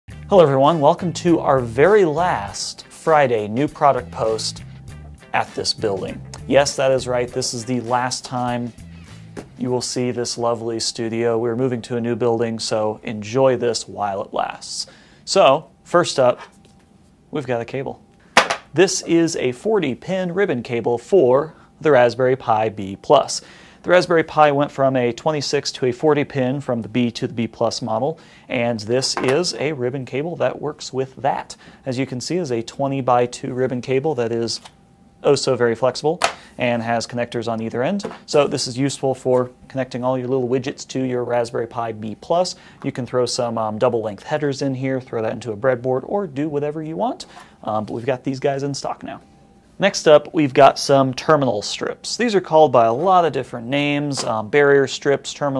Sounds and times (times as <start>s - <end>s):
Speech: 0.3s - 4.6s, 5.3s - 8.8s, 9.6s - 16.5s, 17.3s - 18.0s, 18.7s - 55.5s.